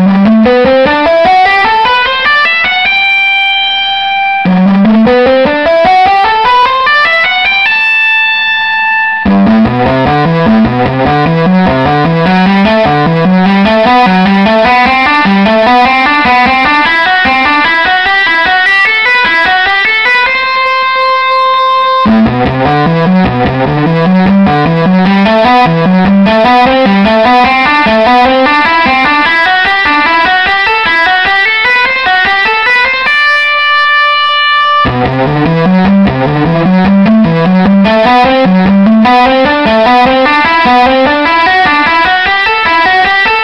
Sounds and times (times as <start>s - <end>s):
Plucked string instrument: 0.0s - 43.4s.